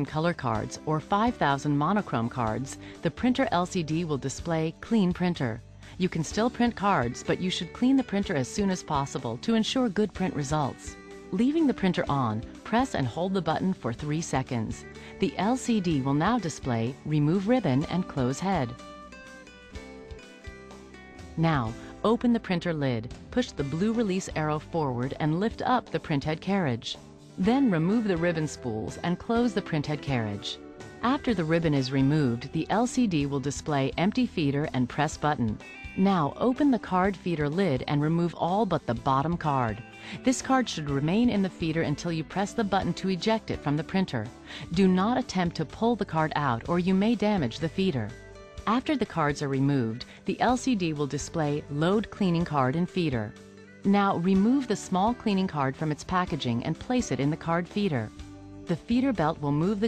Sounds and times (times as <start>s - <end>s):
Speech: 0.0s - 18.8s, 21.4s - 53.3s, 53.9s - 58.1s, 58.7s - 59.8s
Music: 0.0s - 59.8s.